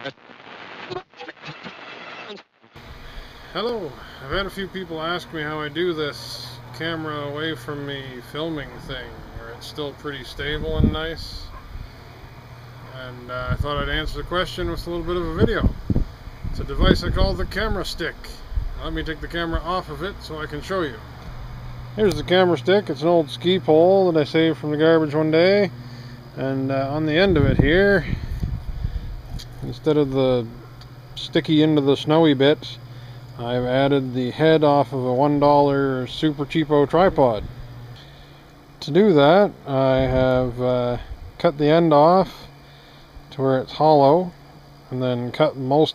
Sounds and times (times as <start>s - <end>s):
Speech: 3.6s - 11.5s, 12.9s - 15.8s, 16.6s - 21.0s, 22.0s - 25.7s, 26.4s - 28.2s, 29.6s - 30.6s, 31.2s - 32.8s, 33.4s - 37.5s, 38.8s - 42.5s, 43.3s - 45.9s.